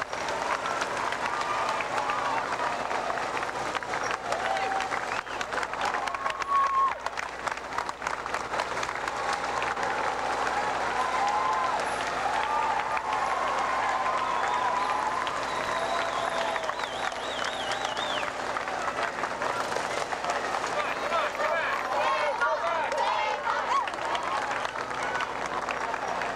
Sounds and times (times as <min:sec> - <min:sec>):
Run: 0:00.0 - 0:26.3.